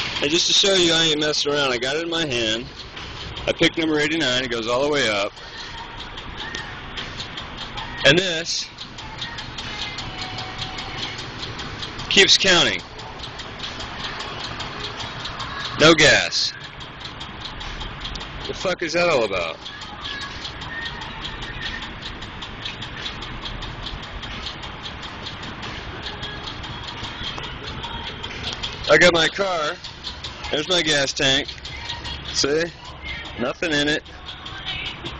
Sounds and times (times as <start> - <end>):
Speech: 0.2 - 2.7, 3.5 - 5.3, 8.0 - 8.7, 12.1 - 12.8, 15.7 - 16.6, 18.5 - 19.6, 28.9 - 29.8, 30.5 - 31.5, 32.4 - 32.8, 33.4 - 34.0
Music: 2.1 - 15.8, 19.3 - 35.2.